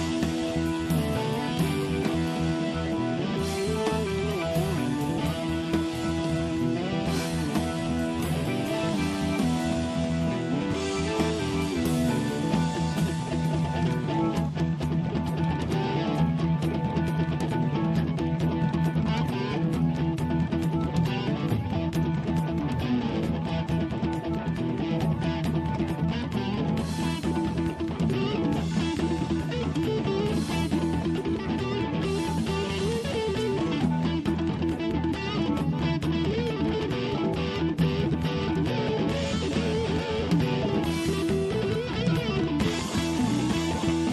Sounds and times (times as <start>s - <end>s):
Music: 0.0s - 44.1s.